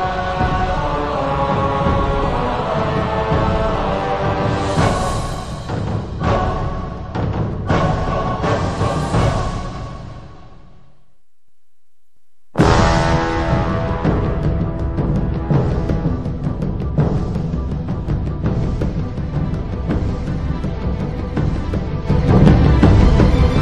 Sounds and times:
Music: 0:00.0 - 0:11.1, 0:12.6 - 0:23.6.

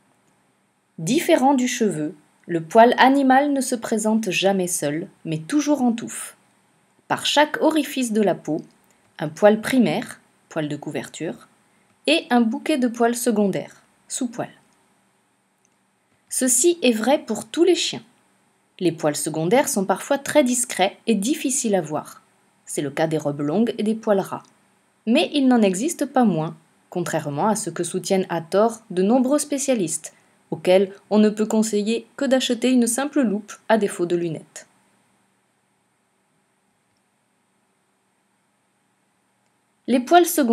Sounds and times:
Speech: 0:01.0 - 0:06.4, 0:07.1 - 0:11.5, 0:12.1 - 0:14.6, 0:16.3 - 0:18.1, 0:18.8 - 0:24.5, 0:25.1 - 0:34.7, 0:39.9 - 0:40.5.

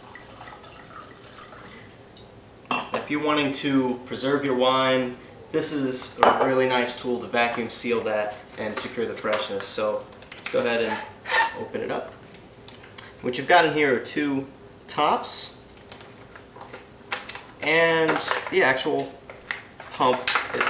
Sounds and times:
Speech: 0:02.9 - 0:12.2, 0:13.2 - 0:15.6, 0:17.6 - 0:19.2, 0:19.9 - 0:20.7.

